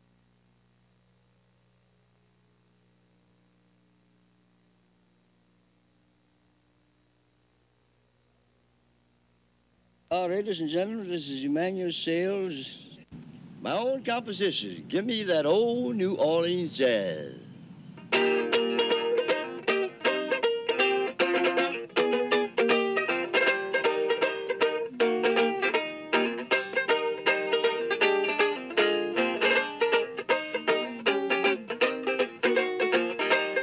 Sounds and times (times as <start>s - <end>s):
Speech: 10.1s - 17.5s
Music: 18.0s - 33.6s.